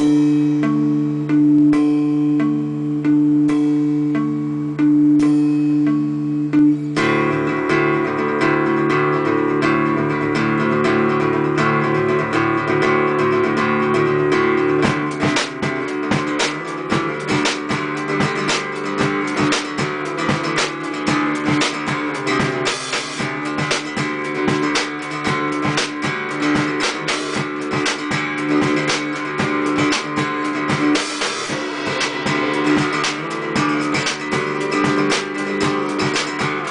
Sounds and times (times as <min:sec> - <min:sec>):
Music: 0:00.0 - 0:36.7.